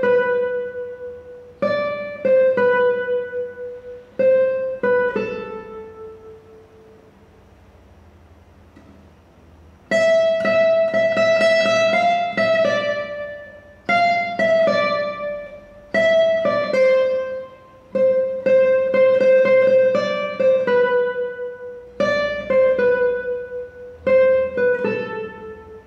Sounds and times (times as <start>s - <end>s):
Guitar: 0.0s - 7.8s, 8.6s - 25.8s.